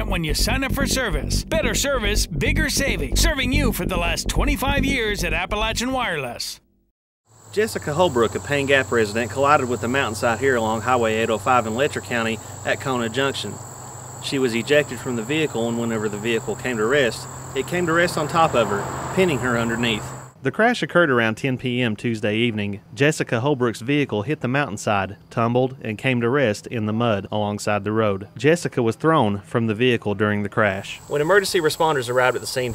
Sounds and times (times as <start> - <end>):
Speech: 0.0 - 6.6, 7.5 - 13.6, 14.2 - 32.7.